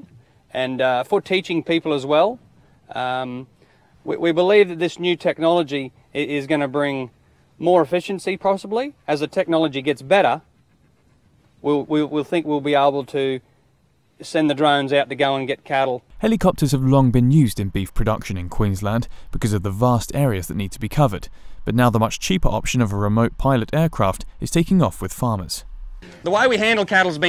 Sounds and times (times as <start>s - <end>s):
Speech: 0.0s - 10.4s, 11.6s - 13.4s, 14.2s - 25.6s, 26.2s - 27.2s.